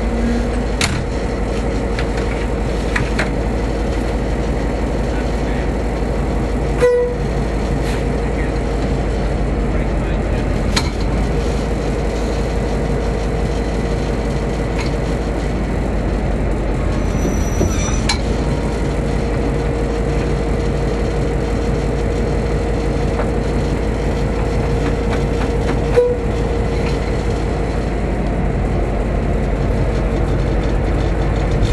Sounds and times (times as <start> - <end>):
Heavy engine (low frequency): 0.0 - 31.7
Idling: 0.0 - 31.7
Vehicle: 0.0 - 31.7
Speech: 5.0 - 5.8, 9.7 - 10.6.